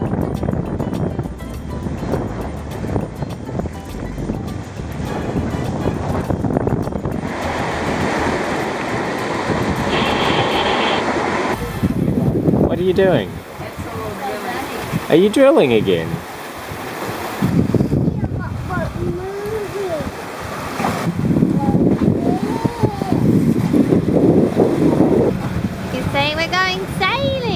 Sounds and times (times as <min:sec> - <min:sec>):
Music: 0:00.0 - 0:11.0
Outside, rural or natural: 0:00.0 - 0:27.5
Sailboat, sailing ship: 0:00.0 - 0:27.5.